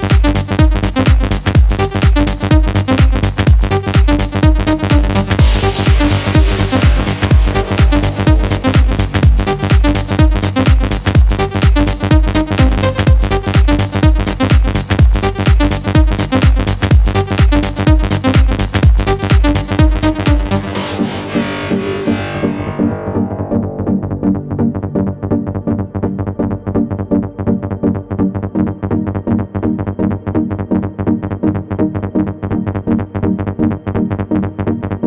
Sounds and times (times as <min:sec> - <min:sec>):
Music: 0:00.0 - 0:35.0.